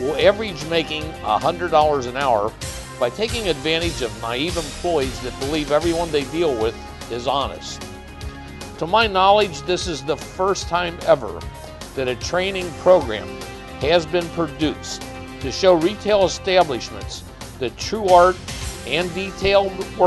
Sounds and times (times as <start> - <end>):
Speech: 0.0 - 7.8, 8.8 - 11.4, 12.0 - 20.0
Music: 0.0 - 20.0.